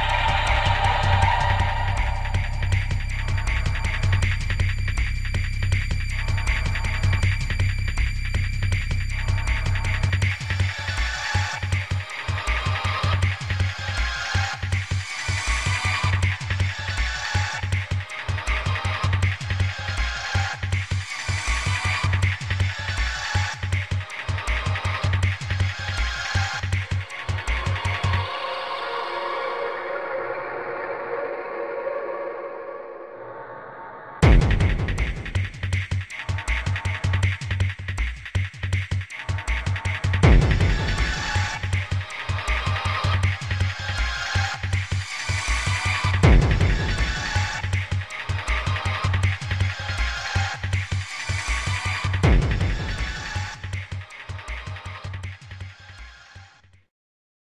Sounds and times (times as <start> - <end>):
Music: 0.0 - 56.9.